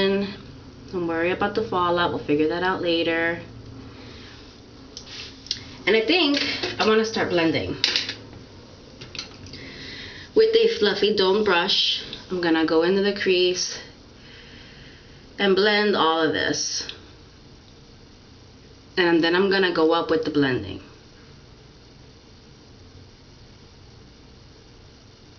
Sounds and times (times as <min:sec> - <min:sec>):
Speech: 0:00.0 - 0:03.5, 0:05.8 - 0:07.8, 0:10.4 - 0:14.0, 0:15.4 - 0:17.0, 0:19.0 - 0:20.9.